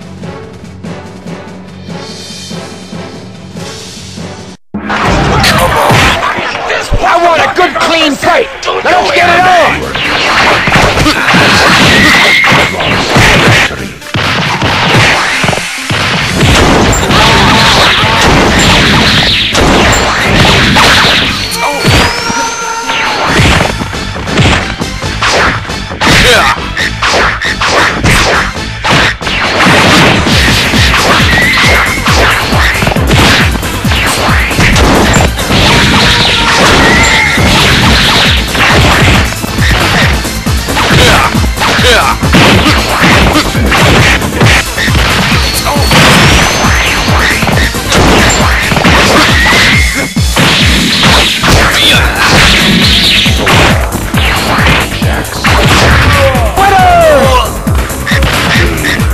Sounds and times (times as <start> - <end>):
Whack, thwack: 5.0 - 6.3, 10.2 - 22.2, 23.2 - 56.6.